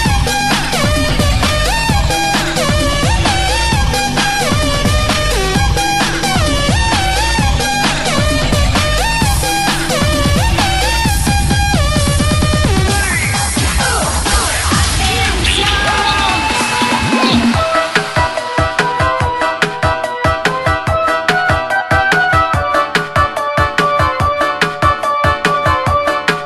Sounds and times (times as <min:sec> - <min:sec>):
Electronic dance music: 0:00.0 - 0:26.4.